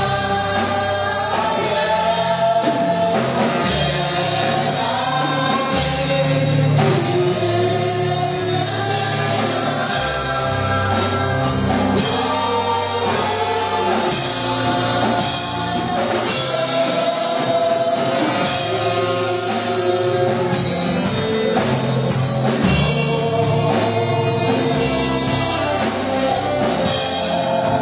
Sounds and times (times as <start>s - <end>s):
Gospel music: 0.0s - 27.8s.